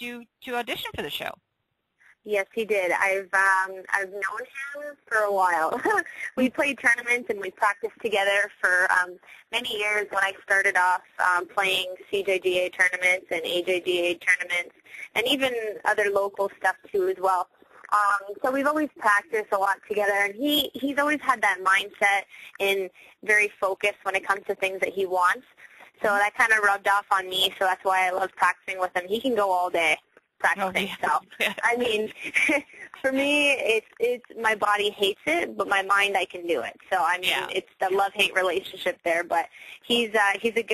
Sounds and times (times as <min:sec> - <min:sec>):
Speech: 0:00.0 - 0:01.4, 0:02.3 - 0:40.7.